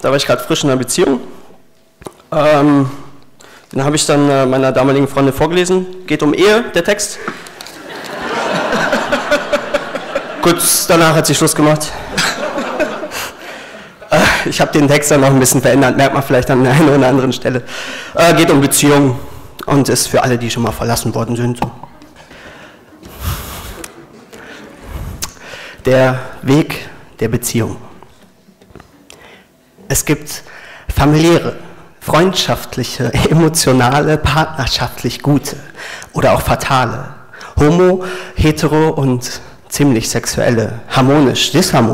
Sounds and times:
Speech: 0.0s - 1.3s, 2.3s - 3.2s, 3.8s - 7.2s, 10.4s - 12.0s, 14.1s - 22.2s, 25.8s - 28.0s, 29.9s - 41.9s.

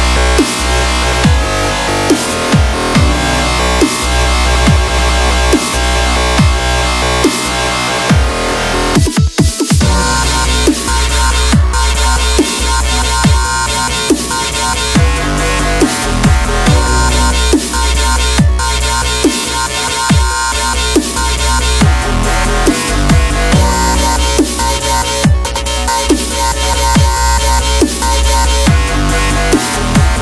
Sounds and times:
Dubstep: 0.0s - 30.2s.

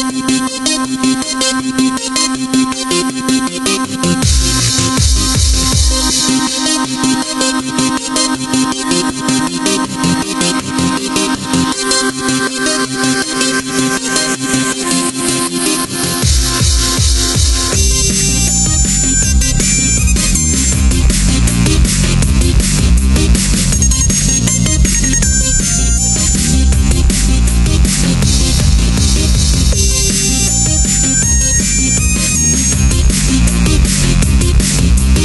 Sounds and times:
Drum and bass: 0.0s - 35.2s
Dubstep: 0.0s - 35.2s
Techno: 0.0s - 35.2s
Theme music: 4.2s - 9.0s, 13.4s - 35.2s.

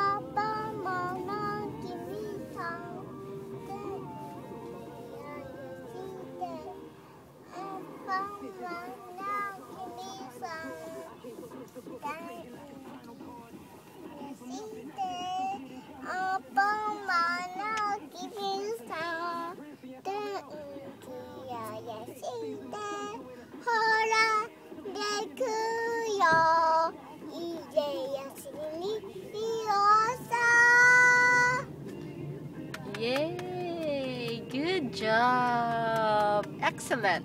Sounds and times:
Child singing: 0.0s - 6.8s, 7.5s - 11.2s, 12.0s - 12.7s, 14.2s - 31.7s.

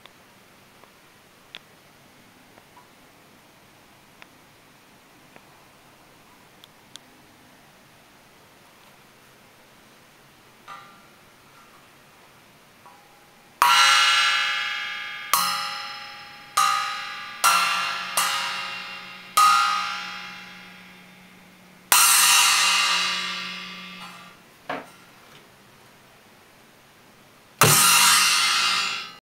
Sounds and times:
Music: 13.6s - 24.4s, 27.6s - 29.2s.

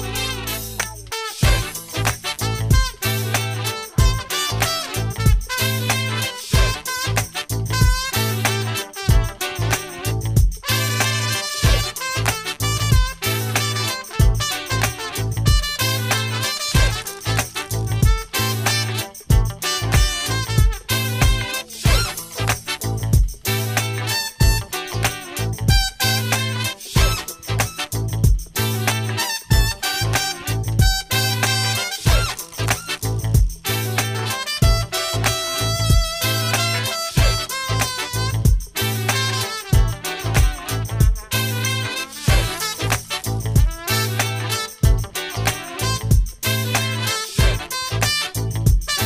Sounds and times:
Swing music: 0.0s - 49.0s.

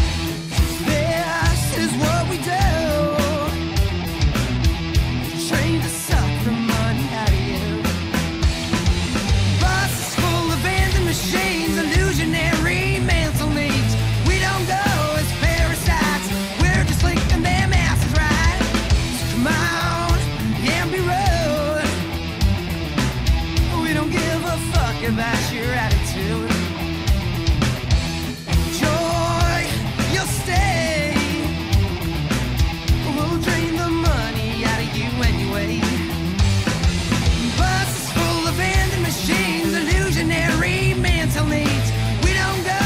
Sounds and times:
Music: 0.0s - 42.8s.

